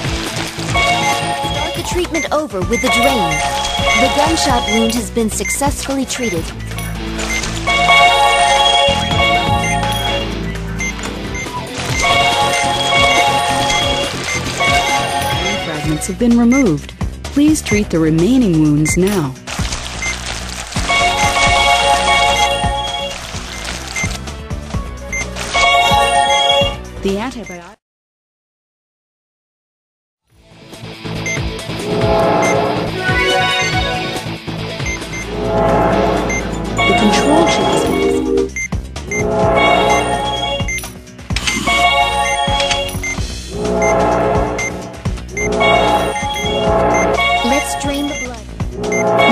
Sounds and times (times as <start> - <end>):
Music: 0.0 - 27.8, 30.3 - 49.3
Speech: 1.8 - 3.4, 4.0 - 6.5, 15.5 - 19.4, 27.0 - 27.8, 47.4 - 48.4.